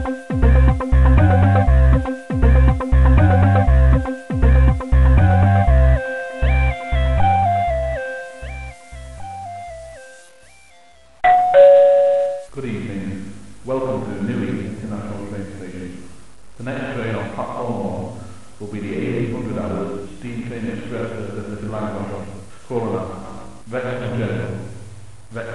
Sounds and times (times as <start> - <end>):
Music: 0.0 - 11.2.